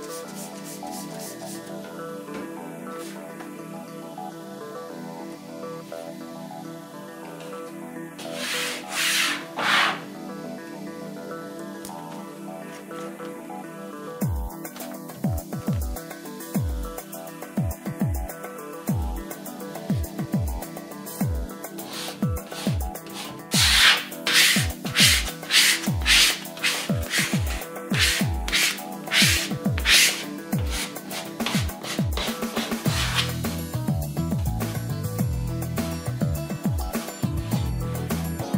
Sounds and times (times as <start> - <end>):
Music: 0.0 - 38.5.